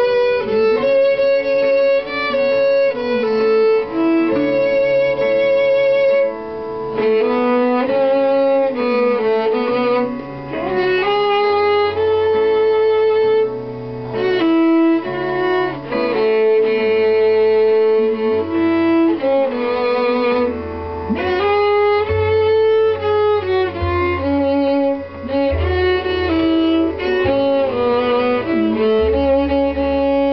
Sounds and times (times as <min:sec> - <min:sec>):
Music: 0:00.0 - 0:30.3.